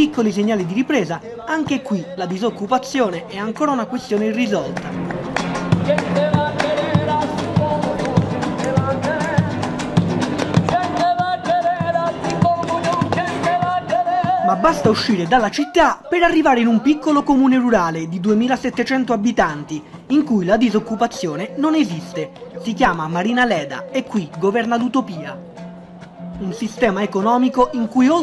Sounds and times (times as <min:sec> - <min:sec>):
Speech: 0:00.0 - 0:04.8, 0:14.4 - 0:25.4, 0:26.4 - 0:28.2
Music: 0:00.0 - 0:28.2.